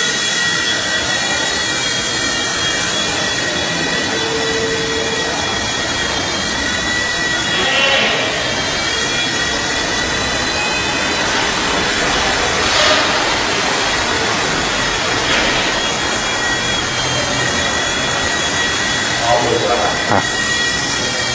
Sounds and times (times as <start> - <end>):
Helicopter: 0.0 - 12.8, 13.4 - 21.3.